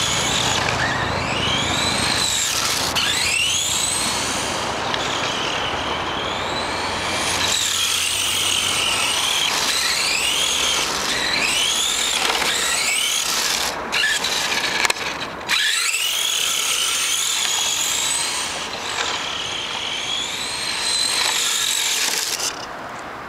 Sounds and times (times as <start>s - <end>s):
Car: 0.0s - 23.2s.